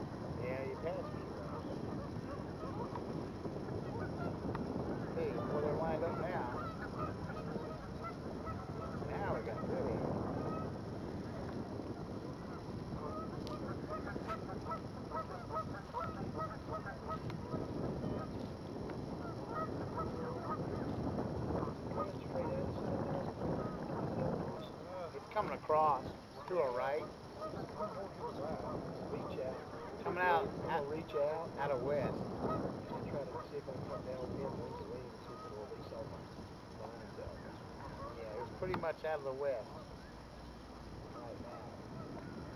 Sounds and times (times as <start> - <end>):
Sailboat, sailing ship: 0.0 - 42.5
Speech: 0.4 - 1.3, 5.1 - 6.6, 24.2 - 27.1, 28.0 - 32.2, 32.9 - 36.2, 38.1 - 39.7.